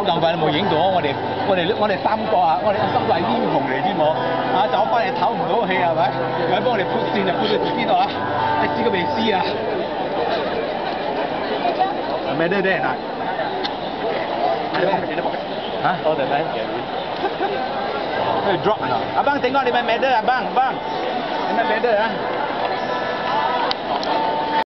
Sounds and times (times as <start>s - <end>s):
Outside, urban or manmade: 0.0s - 24.6s.